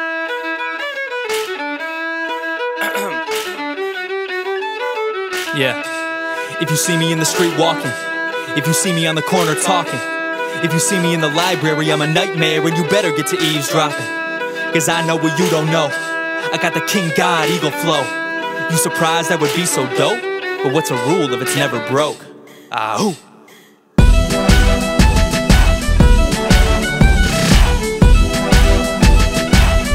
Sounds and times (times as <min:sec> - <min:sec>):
Violin, fiddle: 0:00.0 - 0:22.4, 0:24.0 - 0:29.9.